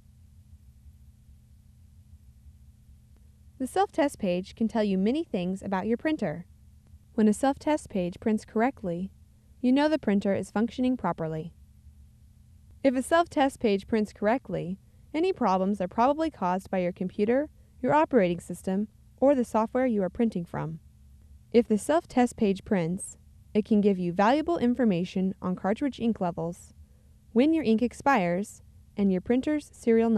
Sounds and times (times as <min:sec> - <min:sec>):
Speech: 0:03.6 - 0:06.5, 0:07.2 - 0:11.6, 0:12.9 - 0:20.8, 0:21.6 - 0:26.8, 0:27.4 - 0:30.1.